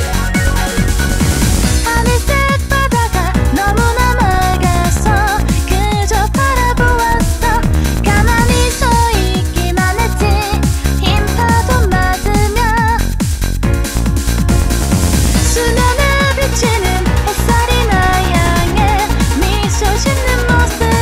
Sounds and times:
Music: 0.0s - 21.0s
Female singing: 1.8s - 13.0s, 15.5s - 21.0s.

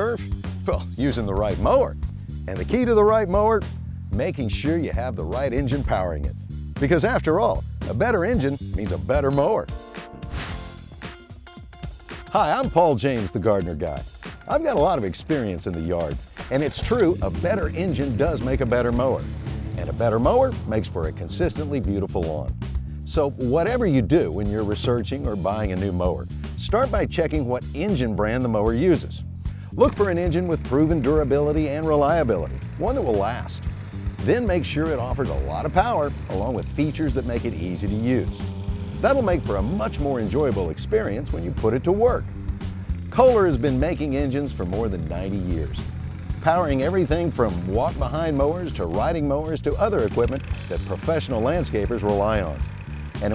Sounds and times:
Speech: 0.0s - 3.6s, 4.2s - 9.7s, 12.3s - 19.2s, 19.8s - 22.5s, 23.1s - 29.2s, 29.8s - 33.6s, 34.2s - 38.4s, 39.0s - 42.2s, 43.2s - 45.8s, 46.4s - 52.6s
Music: 0.0s - 53.3s.

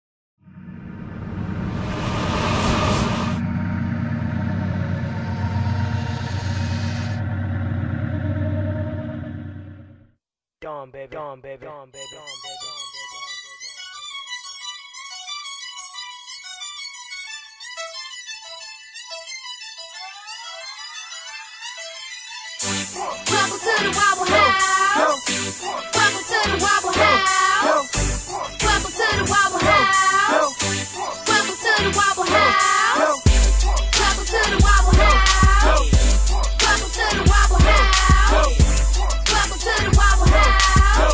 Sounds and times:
Whoosh, swoosh, swish: 0.6s - 4.4s.

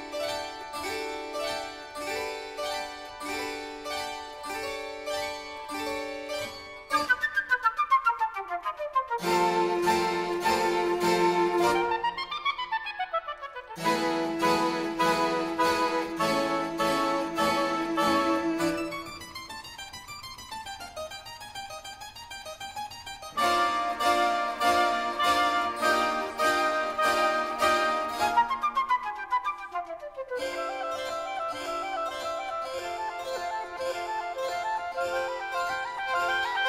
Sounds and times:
Harpsichord: 0.0s - 7.1s, 9.2s - 12.2s, 13.8s - 29.0s, 30.4s - 36.6s
Flute: 6.9s - 19.4s, 23.4s - 36.6s.

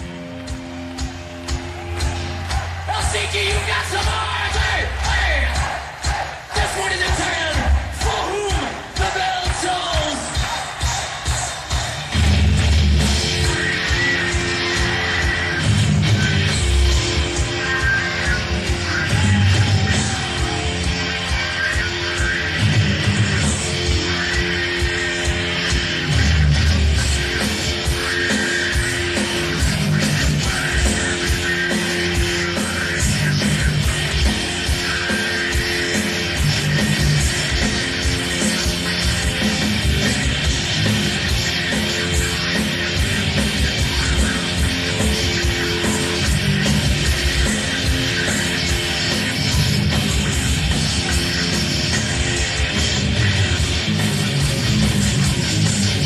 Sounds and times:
Music: 0.0s - 56.0s.

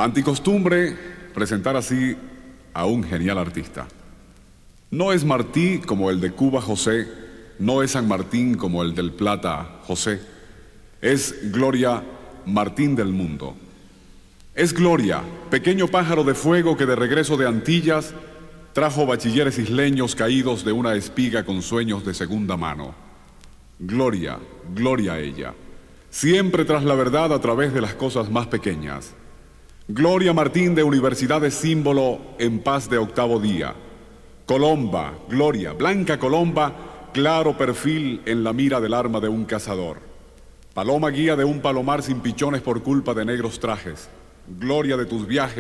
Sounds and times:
Speech: 0.0s - 4.0s, 4.9s - 10.4s, 11.0s - 13.6s, 14.6s - 18.2s, 18.8s - 23.0s, 23.8s - 29.2s, 29.9s - 33.8s, 34.5s - 40.1s, 40.8s - 45.6s.

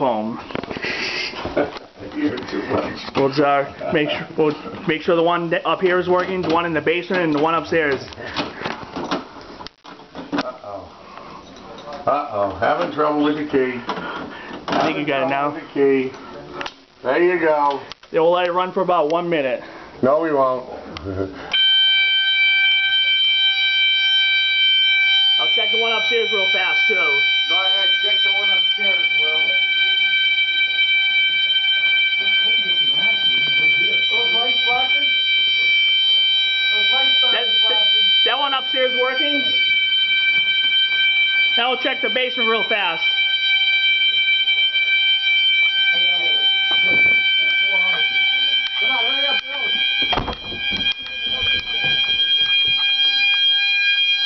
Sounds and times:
Fire alarm: 0.0s - 1.8s, 2.6s - 9.2s, 12.4s - 15.5s, 21.5s - 54.2s
Smoke detector, smoke alarm: 21.5s - 54.2s.

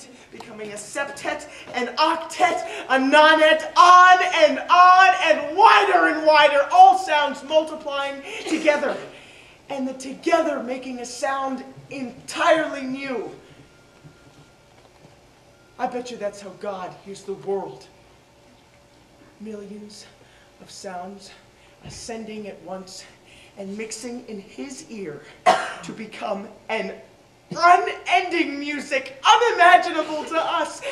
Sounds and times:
Speech: 0.0s - 9.1s, 9.7s - 13.4s, 15.8s - 17.9s, 19.4s - 30.9s.

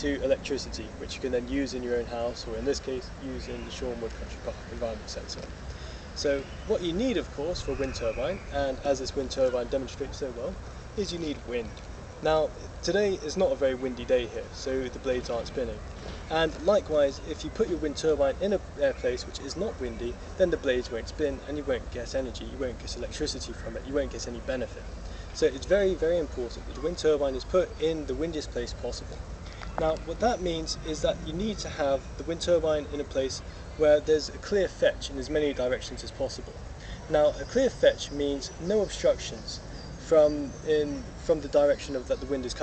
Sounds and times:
Speech: 0.0s - 5.6s, 6.2s - 29.1s, 29.8s - 42.6s.

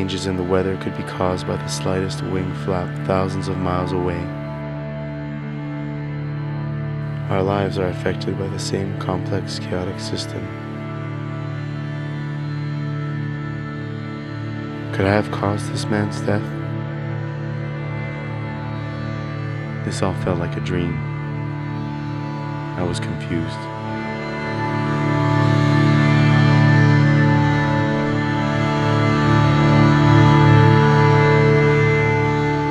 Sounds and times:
Speech: 0.0s - 4.3s, 7.3s - 10.5s, 14.9s - 16.6s, 19.9s - 21.0s, 22.8s - 23.7s
Music: 0.0s - 32.7s.

